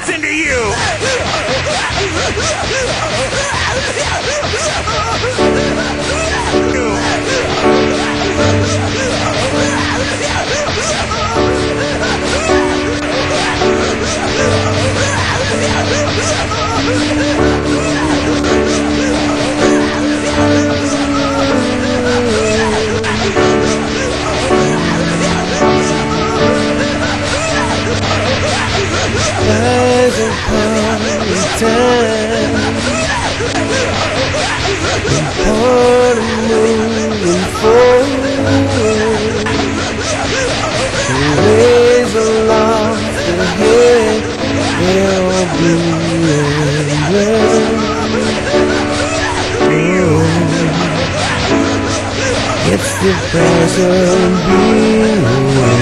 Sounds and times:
Music: 0.6 - 55.8.

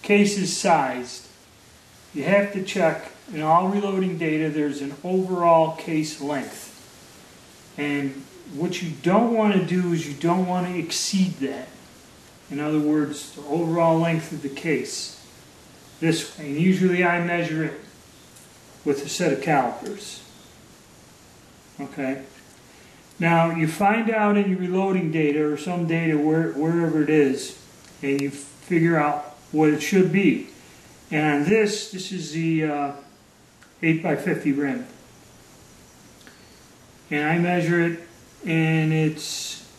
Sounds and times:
Speech: 0.0 - 1.3, 2.2 - 6.8, 7.8 - 11.8, 12.5 - 15.2, 16.0 - 17.9, 18.8 - 20.3, 21.8 - 22.3, 23.2 - 30.5, 31.1 - 33.1, 33.8 - 35.0, 37.1 - 39.7.

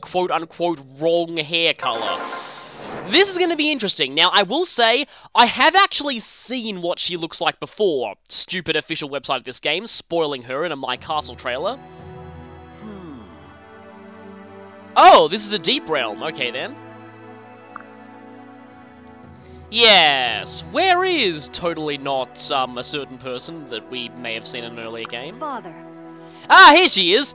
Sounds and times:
Speech: 0.0 - 2.3, 3.1 - 11.8, 15.0 - 16.7, 19.8 - 25.7, 26.5 - 27.3
Music: 10.8 - 27.3.

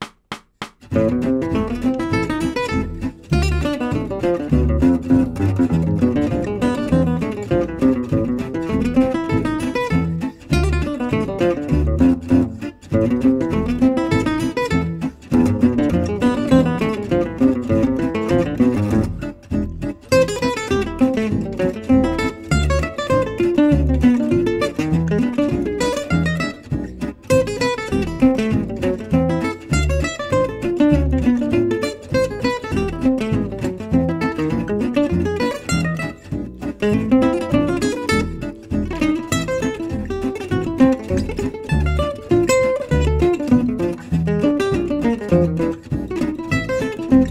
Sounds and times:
Strum: 0.0 - 47.3.

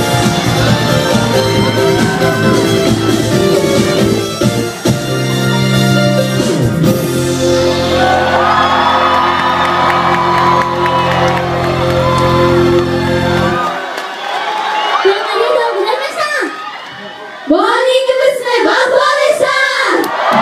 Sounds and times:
Music: 0.0 - 14.0
Speech: 15.0 - 16.5.

